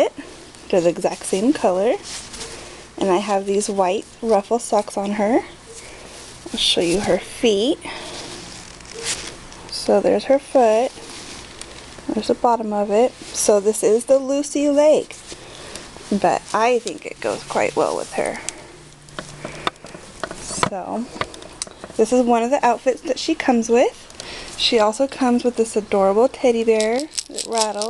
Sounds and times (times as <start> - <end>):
Speech: 0.0 - 2.0, 3.0 - 5.5, 6.5 - 7.9, 9.7 - 10.9, 12.1 - 15.2, 16.1 - 18.5, 20.6 - 21.1, 22.0 - 24.0, 24.6 - 27.9.